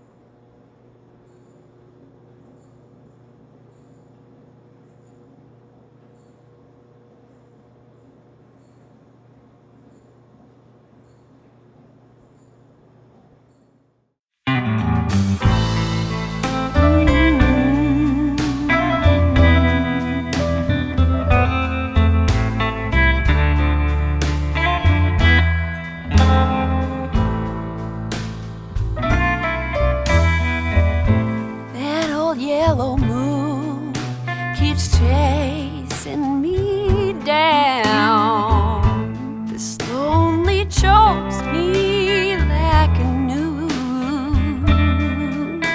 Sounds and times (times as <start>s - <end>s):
Blues: 14.5s - 45.7s.